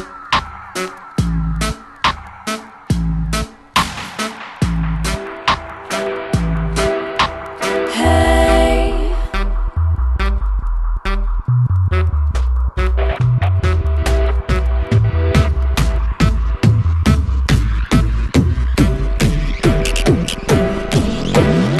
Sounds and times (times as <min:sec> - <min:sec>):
Dubstep: 0:00.0 - 0:21.7.